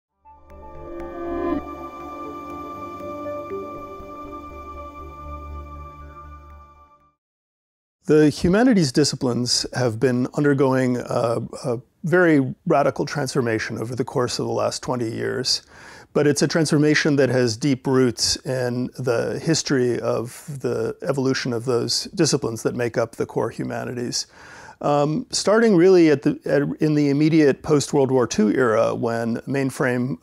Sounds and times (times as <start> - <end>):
Synthesizer: 0.2 - 7.1.